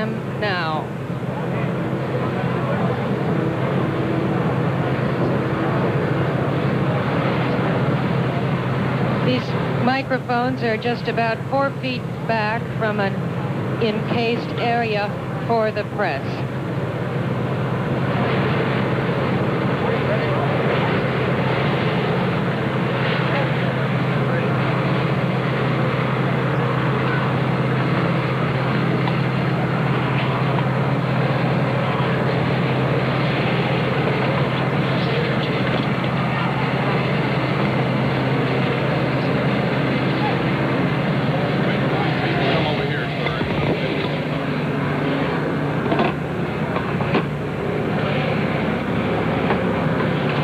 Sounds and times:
Female speech, woman speaking: 0.0 - 0.9, 9.3 - 13.2, 13.8 - 16.4.

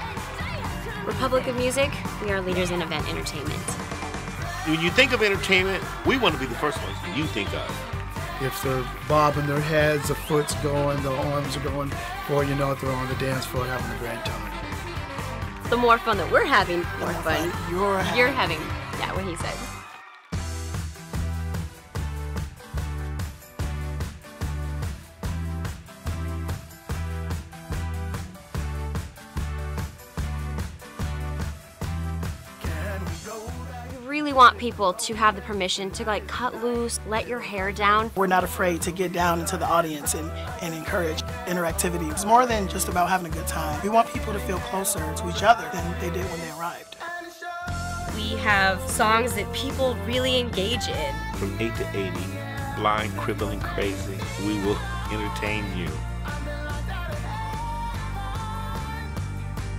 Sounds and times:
Pop music: 0.0 - 59.7
Speech: 4.7 - 7.8, 8.4 - 14.4, 15.8 - 19.6, 34.1 - 46.9, 48.2 - 56.0.

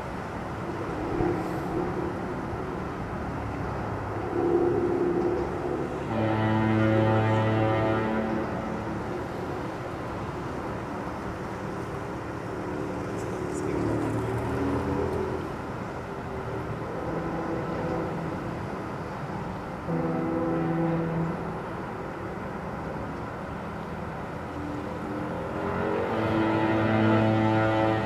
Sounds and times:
Outside, rural or natural: 0.0 - 28.0
Foghorn: 4.3 - 12.9, 16.8 - 19.2, 19.8 - 22.5, 24.3 - 28.0
Vehicle horn, car horn, honking: 6.0 - 8.7, 19.9 - 21.5, 25.6 - 28.0
Speech: 13.2 - 14.5.

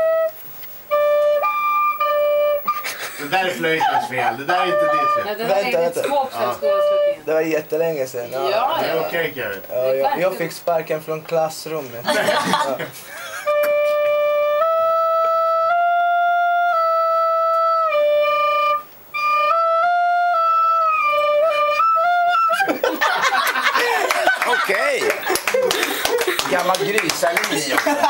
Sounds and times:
Flute: 0.0 - 9.1, 13.3 - 22.9.

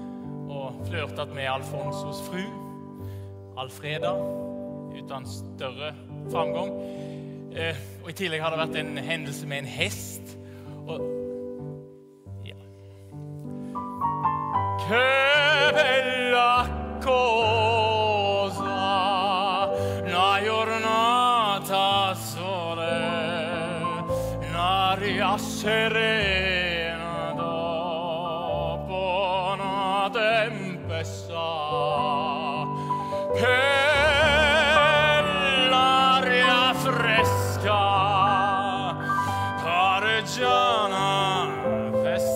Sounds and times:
Opera: 0.0 - 11.7, 12.5 - 42.3.

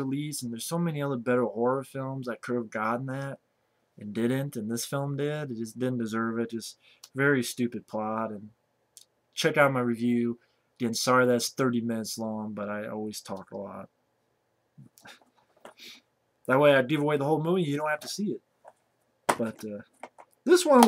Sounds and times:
Speech: 0.0 - 3.4, 4.0 - 8.6, 9.4 - 13.9, 16.5 - 18.4, 19.3 - 20.8.

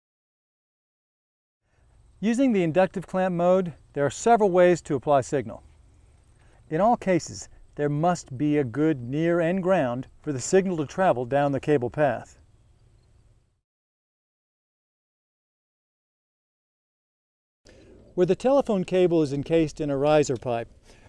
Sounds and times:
Speech: 2.2 - 5.7, 6.7 - 12.4, 18.2 - 20.7.

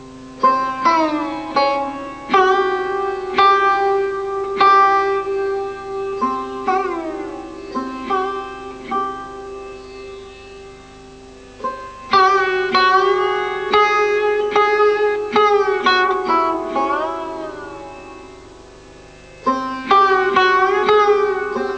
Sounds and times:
Sitar: 0.0 - 21.7.

